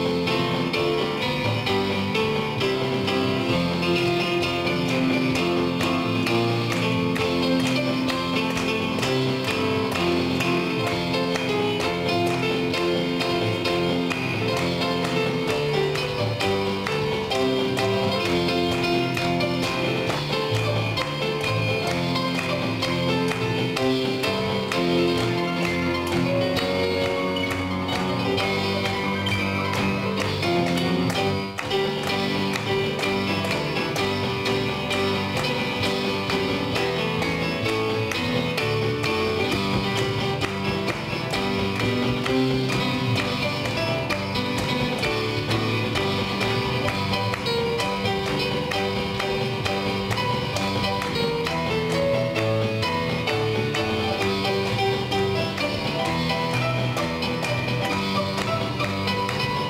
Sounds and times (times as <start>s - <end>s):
Gospel music: 0.0s - 59.6s.